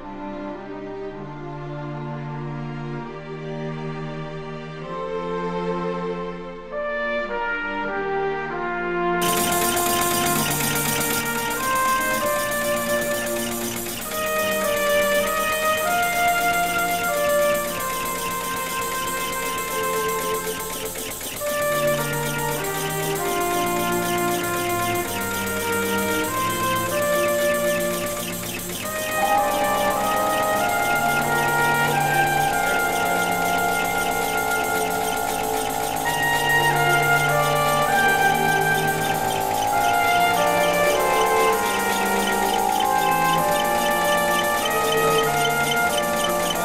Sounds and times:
Music: 0:00.0 - 0:46.6.

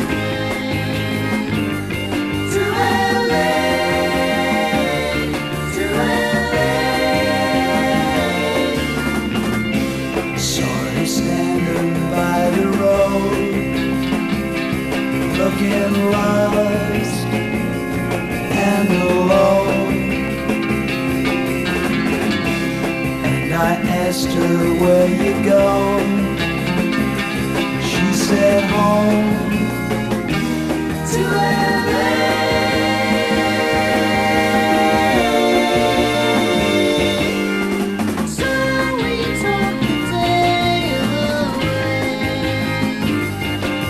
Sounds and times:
Music: 0:00.0 - 0:43.9.

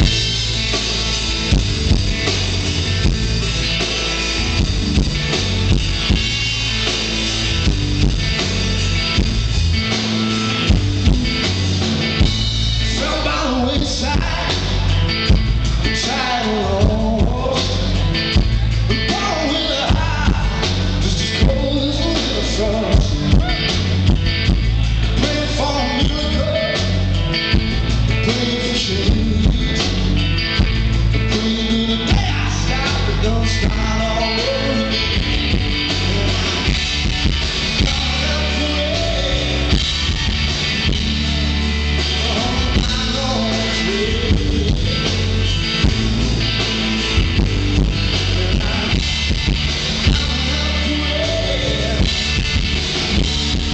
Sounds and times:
Rock and roll: 0:00.0 - 0:53.7.

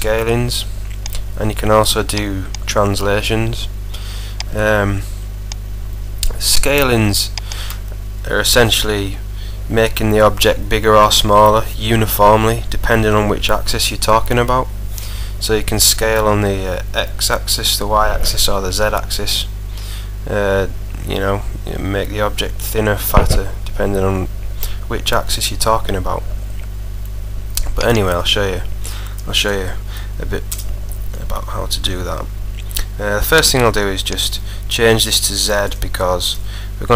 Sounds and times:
Speech: 0:00.0 - 0:00.7, 0:01.4 - 0:03.8, 0:04.5 - 0:05.1, 0:06.2 - 0:07.4, 0:08.2 - 0:14.7, 0:15.4 - 0:19.5, 0:20.2 - 0:24.3, 0:24.9 - 0:26.3, 0:27.6 - 0:28.7, 0:29.3 - 0:30.5, 0:31.1 - 0:36.9.

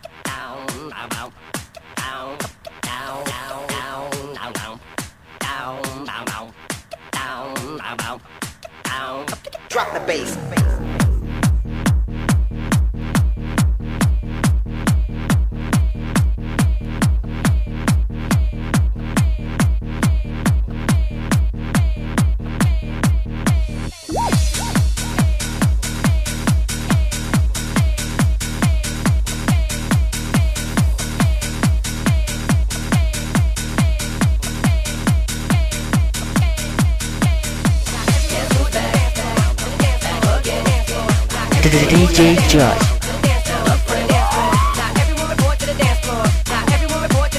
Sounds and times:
Music: 0:00.0 - 0:47.3.

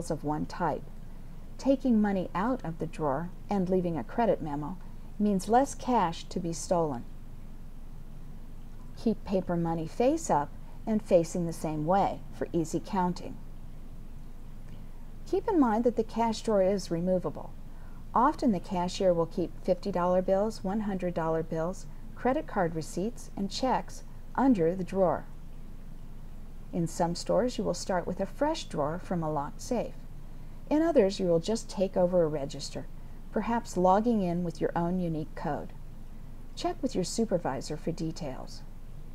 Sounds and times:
Speech: 0:00.0 - 0:00.9, 0:01.6 - 0:07.1, 0:09.0 - 0:13.4, 0:15.3 - 0:17.6, 0:18.2 - 0:25.3, 0:26.7 - 0:30.0, 0:30.7 - 0:35.8, 0:36.6 - 0:38.7.

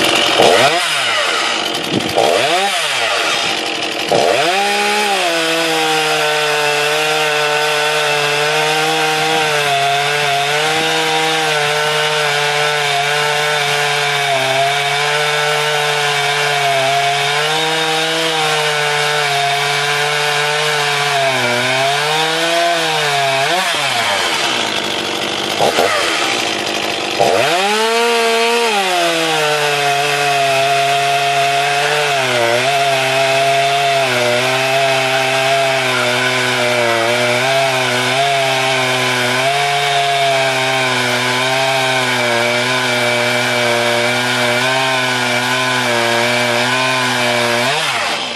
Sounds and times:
Power tool: 0:00.0 - 0:48.3.

